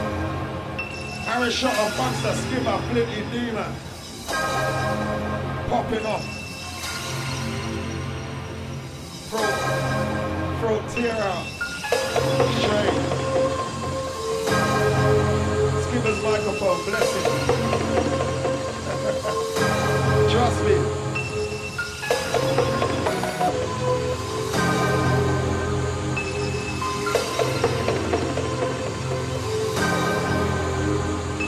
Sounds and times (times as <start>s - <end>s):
Music: 0.0s - 31.4s
Speech: 1.3s - 3.8s, 5.7s - 6.3s, 10.6s - 11.5s, 15.8s - 17.4s, 20.3s - 20.9s.